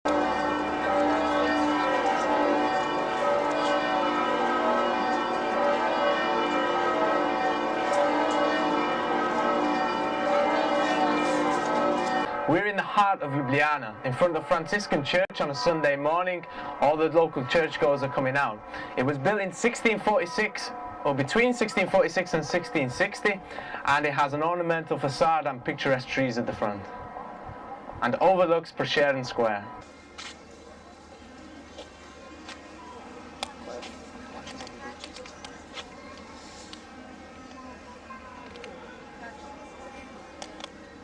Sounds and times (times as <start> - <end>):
Change ringing (campanology): 0.1 - 27.8, 28.8 - 41.0.